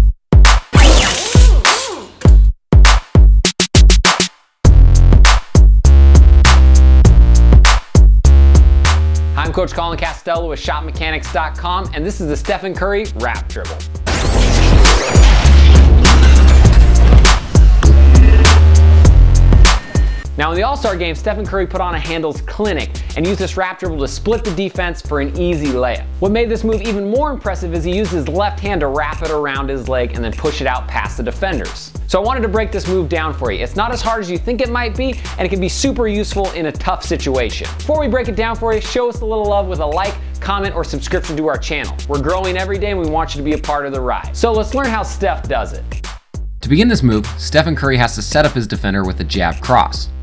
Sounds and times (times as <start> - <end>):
Music: 0.0 - 50.2
Speech: 9.4 - 13.8, 20.4 - 45.8, 46.6 - 50.2.